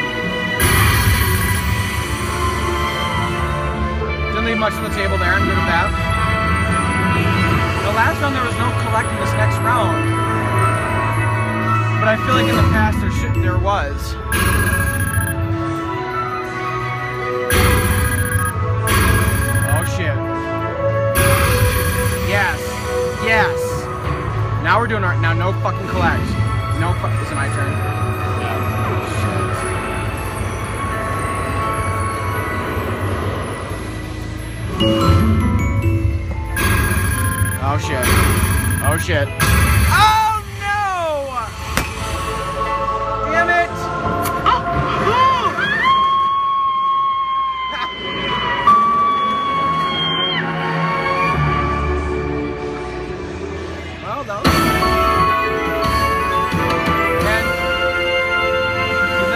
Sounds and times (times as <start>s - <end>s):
Music: 0.0s - 59.3s
Speech: 12.0s - 14.2s, 54.0s - 54.5s.